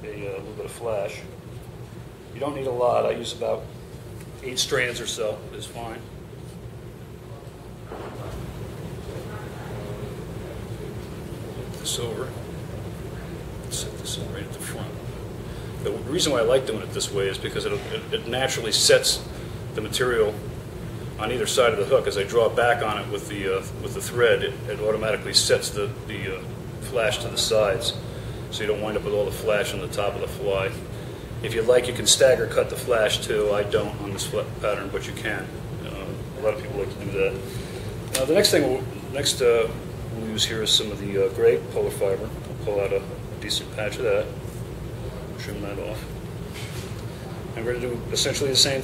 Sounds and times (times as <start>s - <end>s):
Speech: 0.0s - 1.3s, 2.3s - 3.7s, 4.4s - 6.1s, 9.0s - 12.5s, 13.7s - 15.1s, 15.8s - 20.4s, 21.2s - 37.5s, 38.1s - 44.4s, 45.2s - 46.2s, 47.5s - 48.8s.